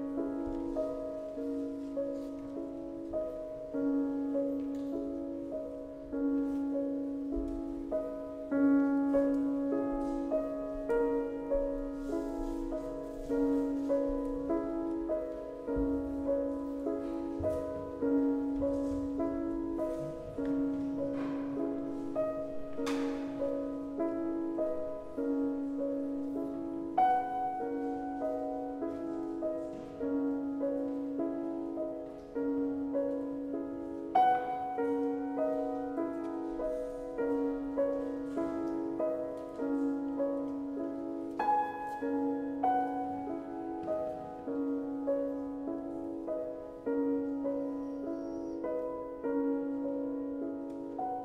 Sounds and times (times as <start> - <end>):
Music: 0.0 - 51.2.